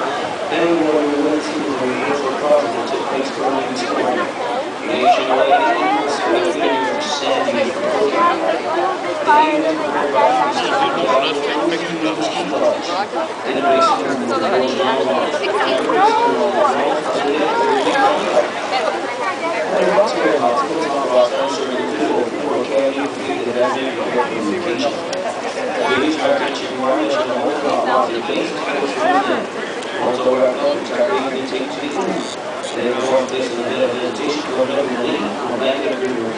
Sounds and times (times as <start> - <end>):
Speech: 0.0 - 36.3.